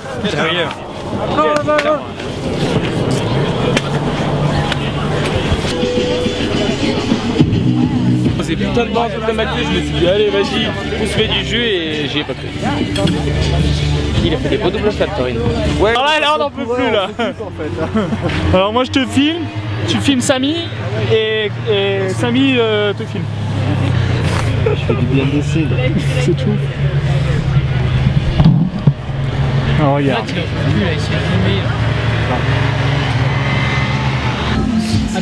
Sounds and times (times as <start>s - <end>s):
Music: 5.1s - 20.2s, 34.5s - 35.2s.